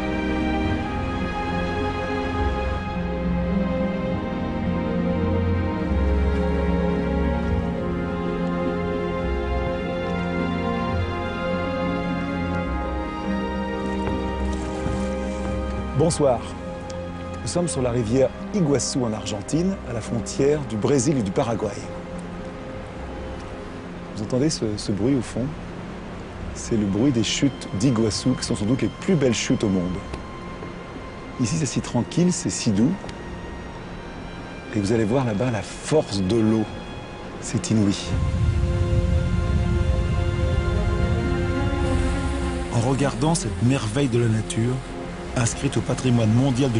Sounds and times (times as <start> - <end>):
Music: 0.0 - 46.7
Speech: 17.4 - 21.9, 26.6 - 30.0, 31.4 - 33.0, 34.7 - 36.7, 37.4 - 38.1, 42.7 - 44.8, 45.4 - 46.7.